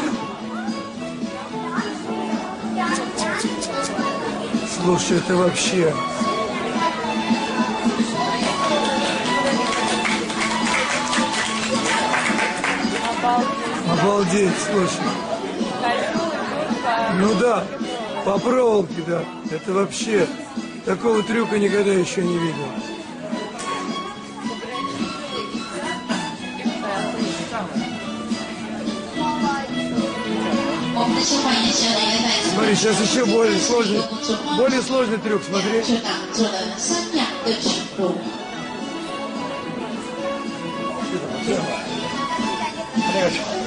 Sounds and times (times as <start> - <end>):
Music: 0.0 - 43.6.